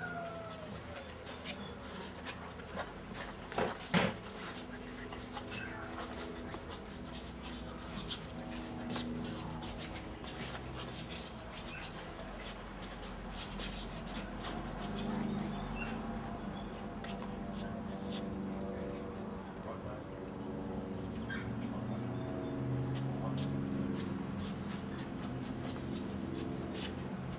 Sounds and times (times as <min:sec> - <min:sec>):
Speech: 0:17.1 - 0:20.4, 0:23.0 - 0:23.7.